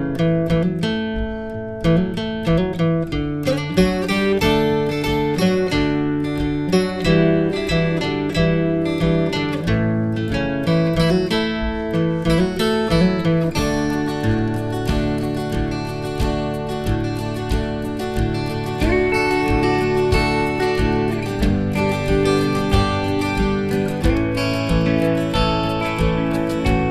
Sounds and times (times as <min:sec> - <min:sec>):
Acoustic guitar: 0:00.0 - 0:26.9.